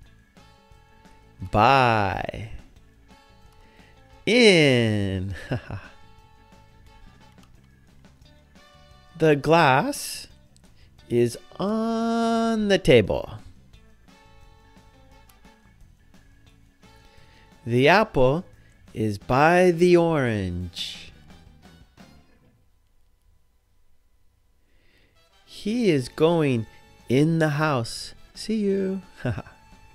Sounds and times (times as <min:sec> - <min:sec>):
Music: 0:00.0 - 0:22.7, 0:24.7 - 0:29.9
Speech: 0:01.4 - 0:02.7, 0:04.2 - 0:05.6, 0:09.2 - 0:10.3, 0:11.1 - 0:13.5, 0:17.6 - 0:21.2, 0:25.5 - 0:29.1.